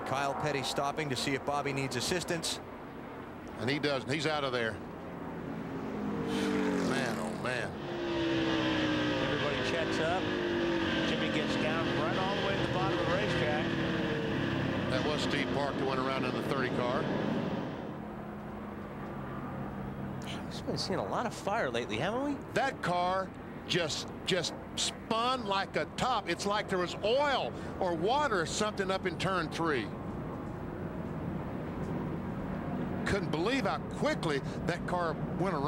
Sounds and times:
Car passing by: 0:05.4 - 0:17.9.

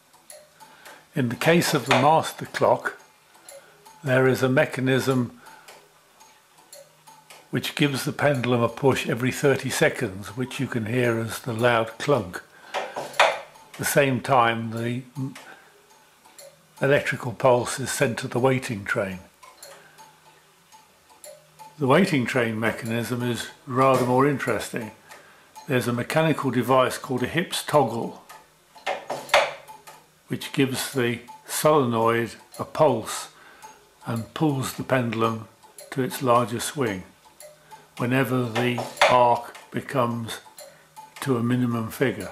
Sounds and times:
Speech: 0:01.2 - 0:03.0, 0:04.0 - 0:05.4, 0:07.6 - 0:12.5, 0:13.8 - 0:15.5, 0:16.8 - 0:19.3, 0:21.8 - 0:25.0, 0:25.7 - 0:28.2, 0:30.3 - 0:33.4, 0:34.0 - 0:37.2, 0:38.0 - 0:40.5, 0:41.2 - 0:42.3.

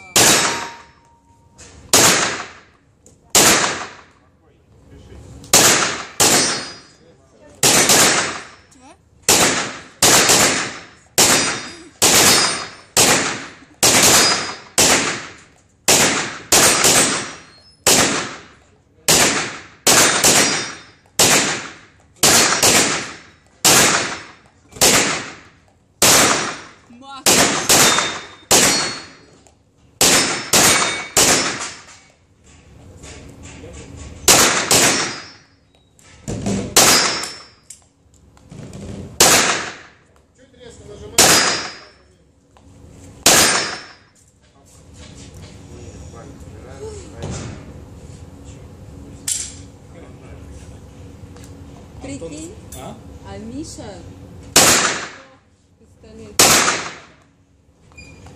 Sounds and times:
Gunshot, gunfire: 0:00.2 - 0:00.8, 0:01.9 - 0:02.7, 0:03.3 - 0:04.1, 0:05.5 - 0:06.9, 0:07.6 - 0:08.6, 0:09.3 - 0:29.2, 0:30.0 - 0:31.9, 0:34.3 - 0:35.4, 0:36.5 - 0:37.5, 0:39.2 - 0:39.9, 0:41.1 - 0:41.9, 0:43.2 - 0:44.0, 0:54.6 - 0:55.2, 0:56.4 - 0:57.2.

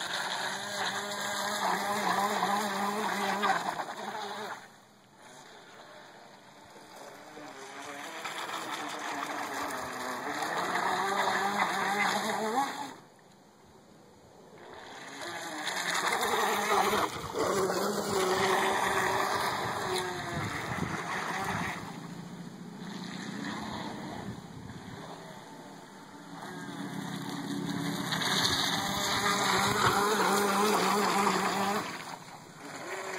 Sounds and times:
Motorboat, speedboat: 0:00.0 - 0:13.3, 0:14.1 - 0:33.1.

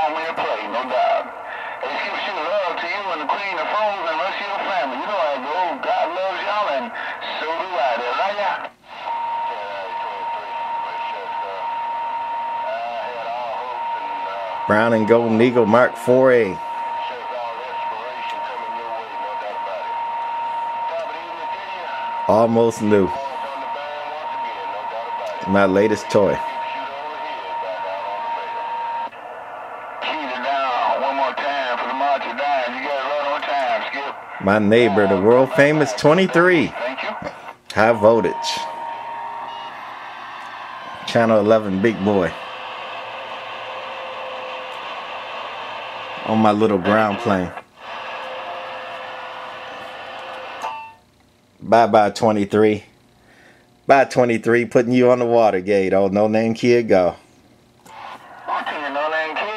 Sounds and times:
Speech: 0:00.0 - 0:08.7, 0:12.7 - 0:19.9, 0:20.8 - 0:28.7, 0:30.0 - 0:38.8, 0:41.1 - 0:42.4, 0:46.2 - 0:47.6, 0:51.6 - 0:52.9, 0:53.9 - 0:57.2, 0:58.5 - 0:59.5
Radio: 0:00.0 - 0:51.0, 0:57.9 - 0:59.5.

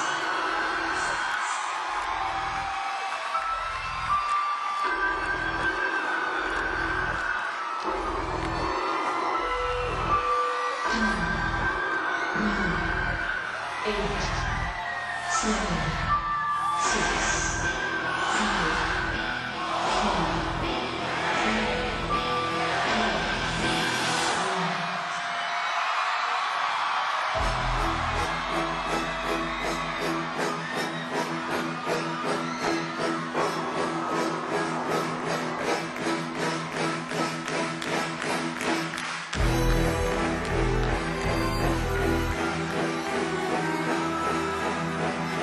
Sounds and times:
Speech: 0:13.8 - 0:14.5, 0:15.3 - 0:16.1, 0:18.2 - 0:19.0.

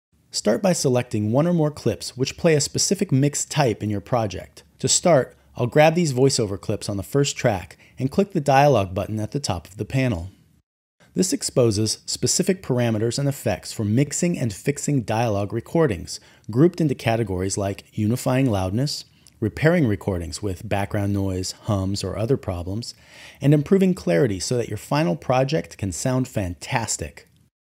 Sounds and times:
Speech: 0:00.3 - 0:10.4, 0:11.2 - 0:27.3.

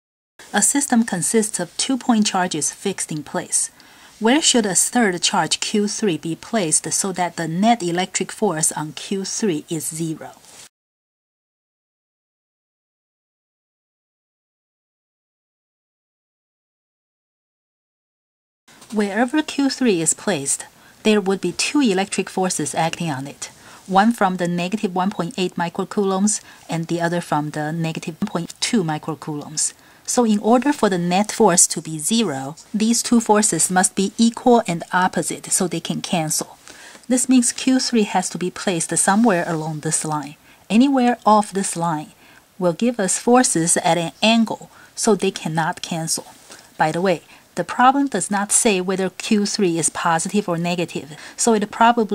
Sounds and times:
Speech: 0:00.5 - 0:10.5, 0:18.9 - 0:52.1.

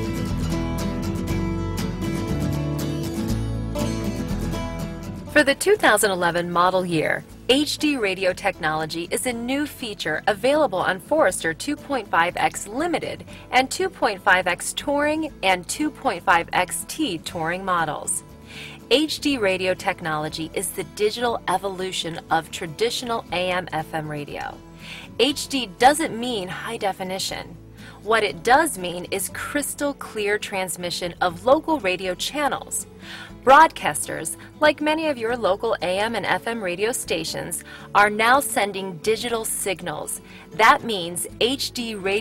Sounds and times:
Music: 0:00.0 - 0:42.2
Speech: 0:05.4 - 0:18.2, 0:18.9 - 0:24.6, 0:25.2 - 0:32.8, 0:33.5 - 0:42.2.

